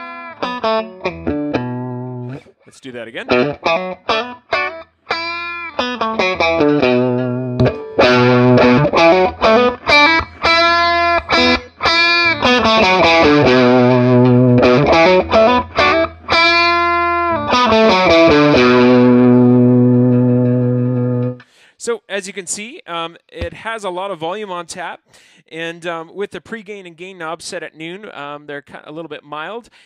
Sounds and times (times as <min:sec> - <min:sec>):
Guitar: 0:00.0 - 0:21.7.